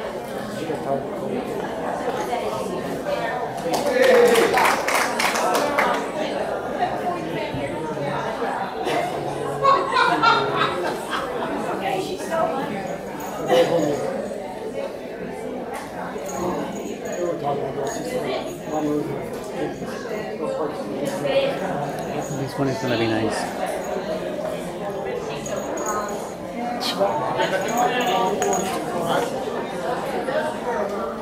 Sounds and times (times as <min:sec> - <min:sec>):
Speech: 0:00.0 - 0:31.2.